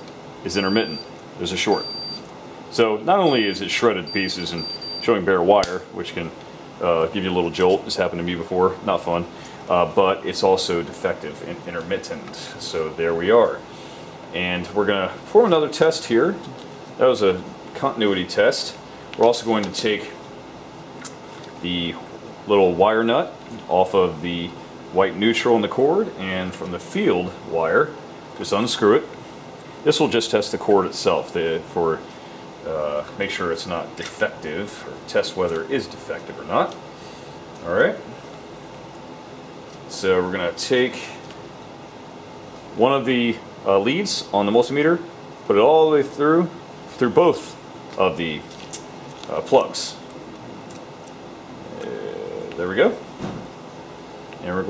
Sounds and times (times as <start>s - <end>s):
Speech: 0.4s - 1.9s, 2.7s - 13.6s, 14.3s - 20.2s, 21.6s - 29.2s, 29.8s - 32.0s, 32.6s - 36.8s, 37.6s - 38.2s, 39.9s - 41.3s, 42.8s - 48.5s, 49.2s - 50.0s, 51.6s - 53.1s, 54.4s - 54.6s.